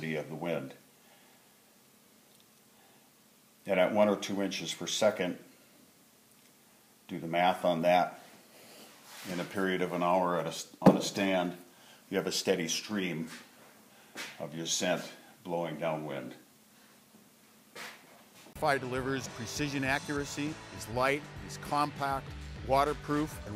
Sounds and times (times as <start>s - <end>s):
Speech: 0.0s - 0.8s, 3.6s - 5.5s, 7.1s - 8.2s, 9.2s - 13.5s, 14.4s - 16.5s, 18.6s - 23.5s.